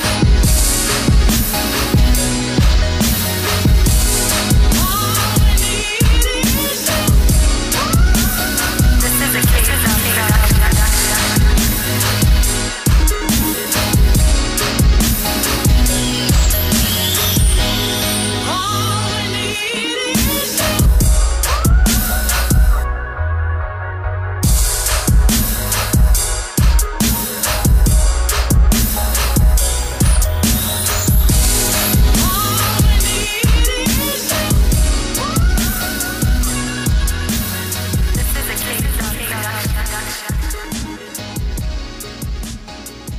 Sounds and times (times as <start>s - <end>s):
Hip hop music: 0.0s - 43.1s.